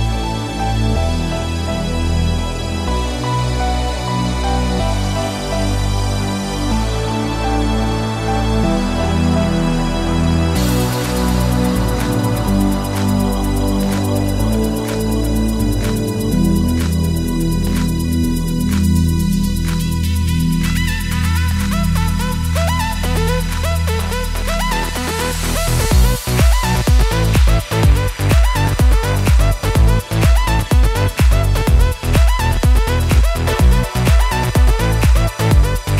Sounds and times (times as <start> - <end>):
House music: 0.0 - 35.9.